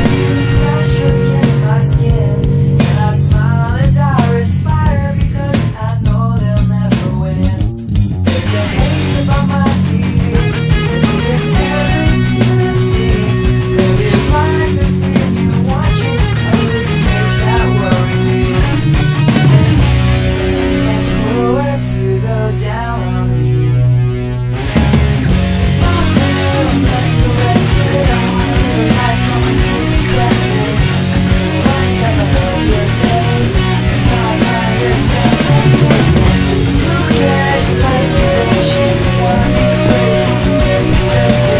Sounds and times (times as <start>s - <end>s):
Bass drum: 0.0s - 21.3s, 24.6s - 41.5s
Drum kit: 0.0s - 22.0s, 24.5s - 41.5s.